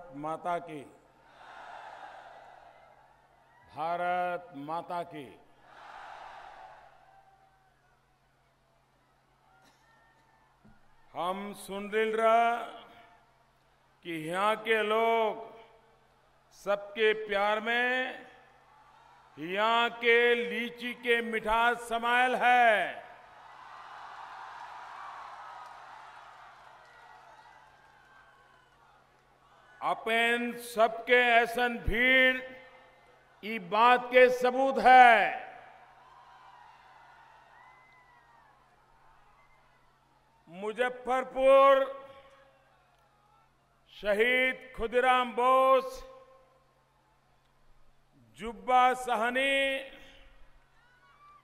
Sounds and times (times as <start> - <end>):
Male speech, man speaking: 0.0 - 1.0, 3.7 - 5.4, 11.2 - 12.9, 14.1 - 15.6, 16.6 - 18.3, 19.4 - 23.0, 29.8 - 32.6, 33.4 - 35.5, 40.5 - 42.0, 43.9 - 46.2, 48.4 - 50.1
Narration, monologue: 0.0 - 1.2, 3.7 - 5.6, 11.1 - 18.6, 19.4 - 23.3, 29.8 - 35.8, 40.4 - 42.4, 43.9 - 46.6, 47.5 - 50.6.